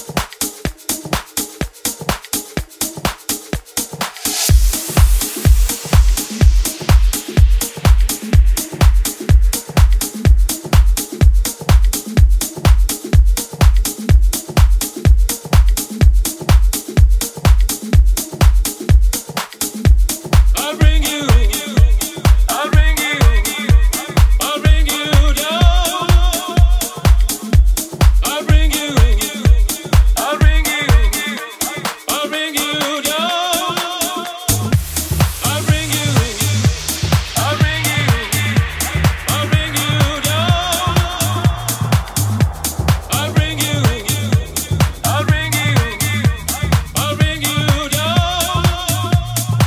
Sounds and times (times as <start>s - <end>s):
Music: 0.0s - 49.6s.